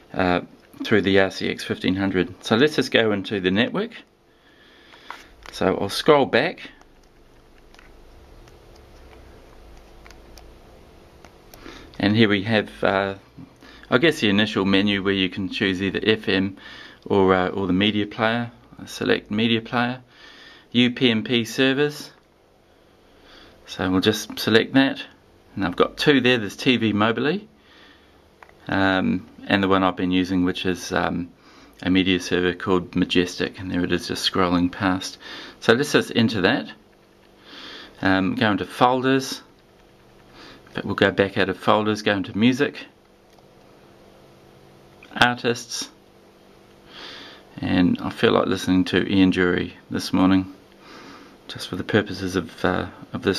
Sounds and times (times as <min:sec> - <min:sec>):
Inside, small room: 0:00.0 - 0:53.3
Speech: 0:00.1 - 0:04.1, 0:05.5 - 0:06.8, 0:12.0 - 0:20.1, 0:20.7 - 0:22.2, 0:23.7 - 0:27.5, 0:28.6 - 0:36.8, 0:38.0 - 0:39.5, 0:40.7 - 0:43.0, 0:45.1 - 0:46.0, 0:47.5 - 0:50.6, 0:51.5 - 0:53.3.